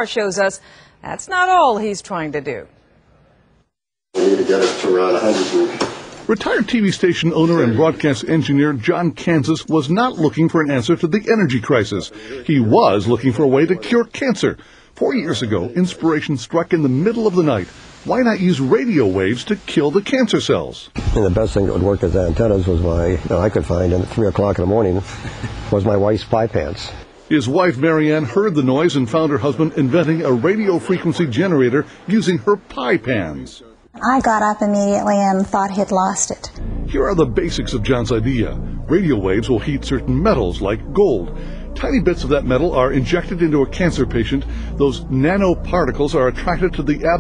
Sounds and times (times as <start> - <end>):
Speech: 4.2 - 25.1, 25.7 - 47.2.